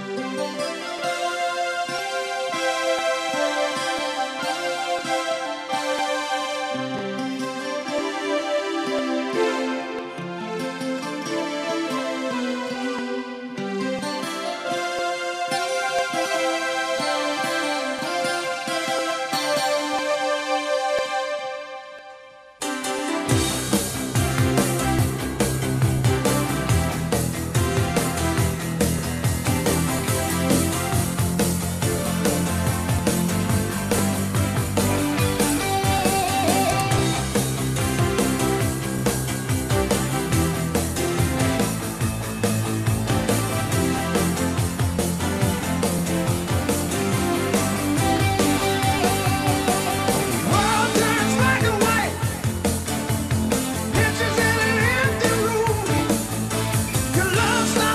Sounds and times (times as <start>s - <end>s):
Music: 0.0s - 57.9s.